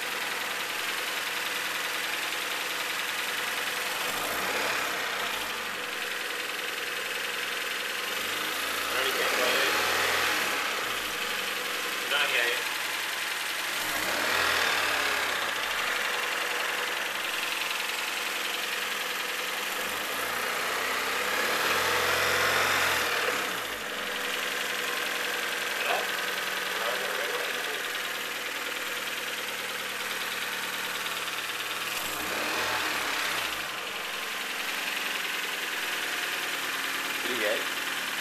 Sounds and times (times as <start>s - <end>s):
Speech: 9.0s - 9.8s, 12.0s - 12.7s, 25.8s - 26.1s, 26.8s - 27.8s, 37.2s - 37.7s.